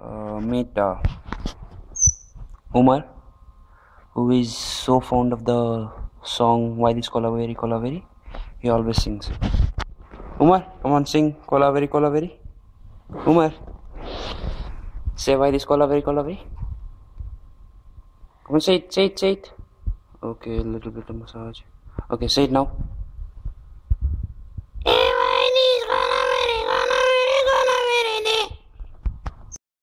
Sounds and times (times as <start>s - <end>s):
Speech: 0.0s - 1.1s, 2.7s - 3.2s, 4.2s - 9.4s, 10.4s - 12.4s, 13.2s - 13.6s, 15.2s - 16.5s, 18.5s - 19.6s, 20.2s - 22.8s, 24.8s - 28.6s.